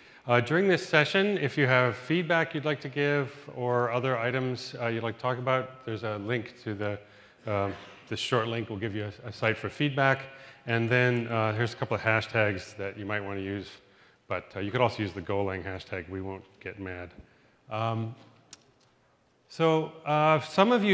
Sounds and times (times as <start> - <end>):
Speech: 0.3 - 18.2, 19.5 - 20.9.